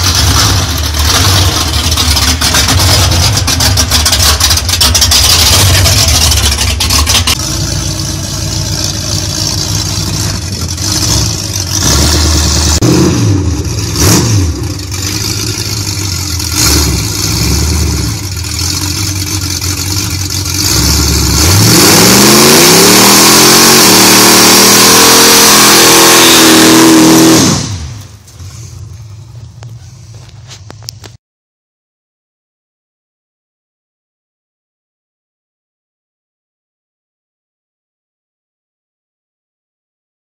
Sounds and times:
Vehicle: 0:00.0 - 0:31.2.

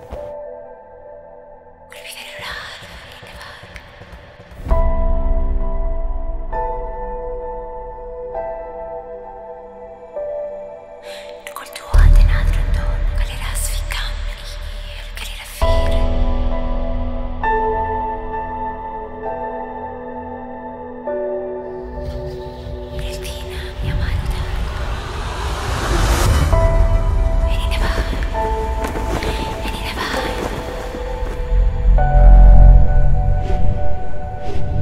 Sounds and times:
Music: 0:00.0 - 0:34.8
Speech: 0:11.1 - 0:16.1, 0:22.0 - 0:24.6.

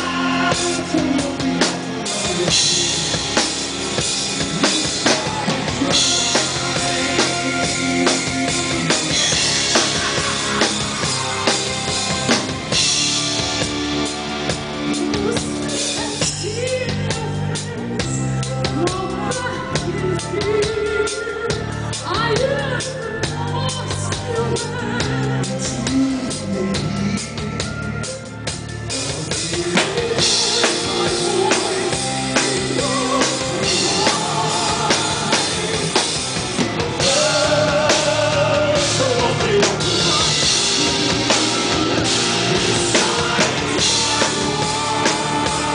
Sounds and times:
Drum kit: 0:00.0 - 0:45.7.

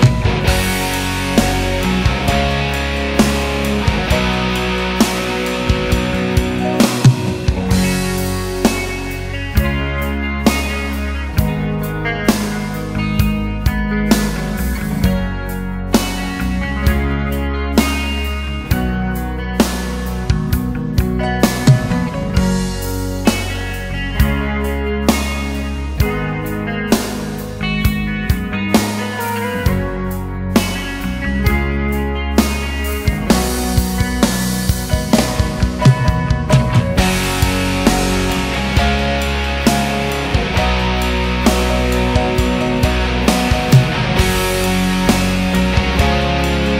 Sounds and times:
Music: 0:00.0 - 0:46.7.

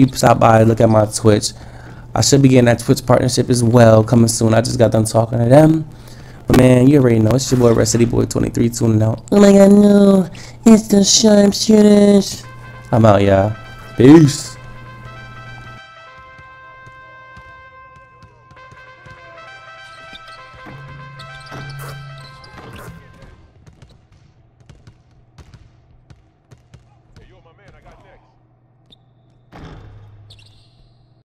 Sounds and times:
Speech: 0:00.0 - 0:01.5, 0:02.2 - 0:05.9, 0:06.5 - 0:14.6, 0:27.2 - 0:28.4
Basketball bounce: 0:16.2 - 0:28.1
Inside, large room or hall: 0:22.6 - 0:31.2.

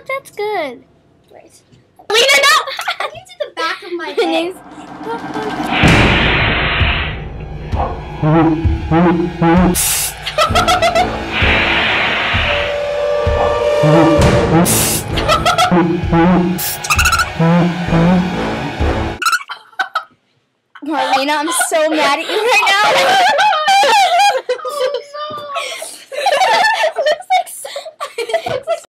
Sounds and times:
Speech: 0:20.8 - 0:23.2, 0:24.7 - 0:25.7.

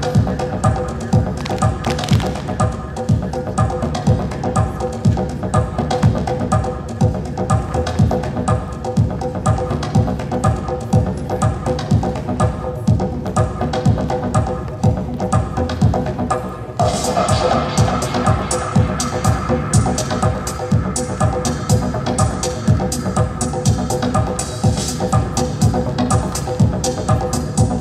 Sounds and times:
Music: 0:00.0 - 0:27.8.

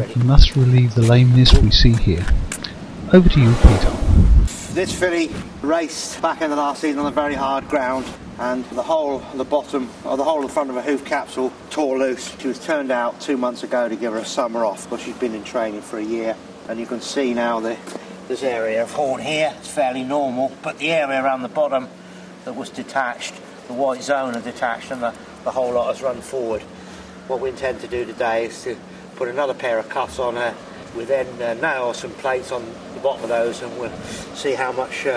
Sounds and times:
Speech: 0:00.0 - 0:02.3, 0:03.1 - 0:04.0, 0:04.7 - 0:26.7, 0:27.3 - 0:35.1.

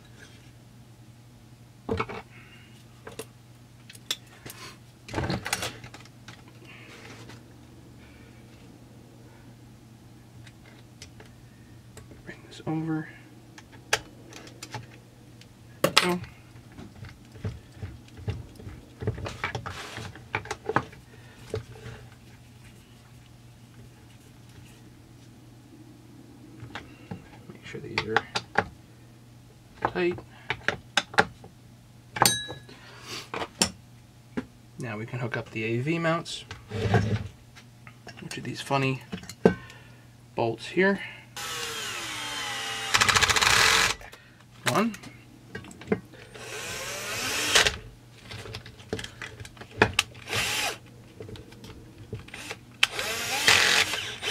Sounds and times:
Speech: 0:12.3 - 0:13.2, 0:27.5 - 0:28.4, 0:34.8 - 0:36.5, 0:38.2 - 0:39.1, 0:40.4 - 0:41.1, 0:44.6 - 0:45.1.

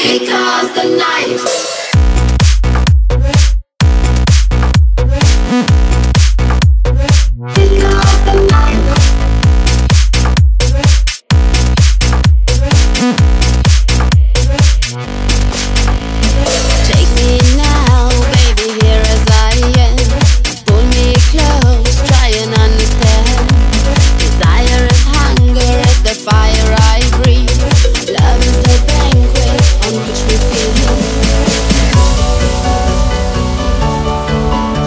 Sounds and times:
Dance music: 0:00.0 - 0:34.8
Electronic dance music: 0:00.0 - 0:34.8.

